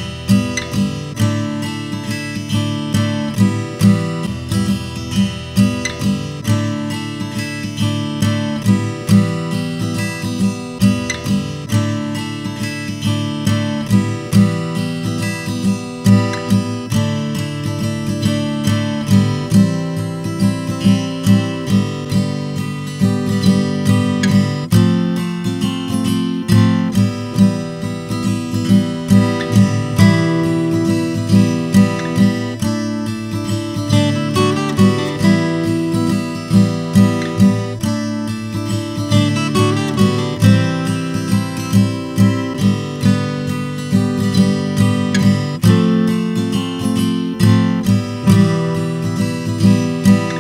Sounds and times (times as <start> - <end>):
Acoustic guitar: 0.0 - 50.4.